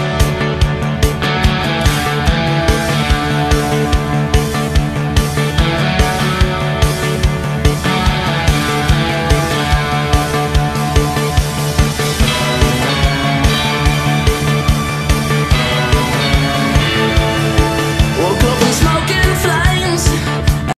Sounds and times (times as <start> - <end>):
Music: 0.0 - 20.7.